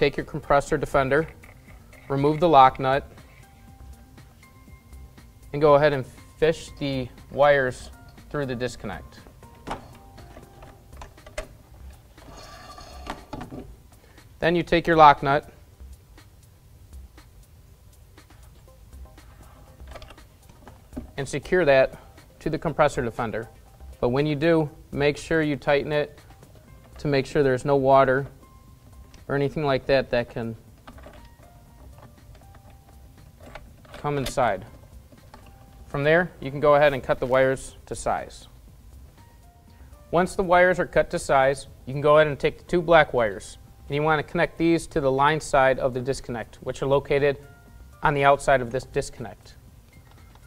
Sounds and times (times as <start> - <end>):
Music: 0.0 - 50.4
Speech: 5.6 - 9.1, 14.4 - 15.6, 21.2 - 26.1, 27.0 - 28.3, 29.3 - 30.6, 34.0 - 34.7, 35.9 - 38.5, 40.2 - 47.4, 48.0 - 49.6.